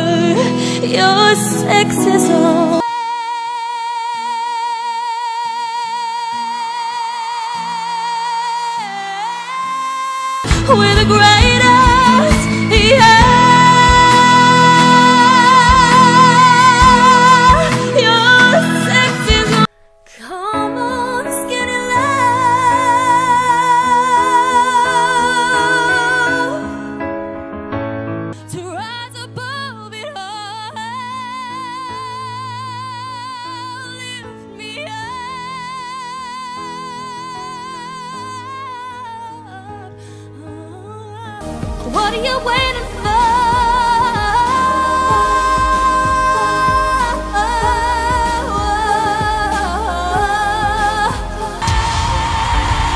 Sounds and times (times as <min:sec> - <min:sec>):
Music: 0:00.0 - 0:52.9.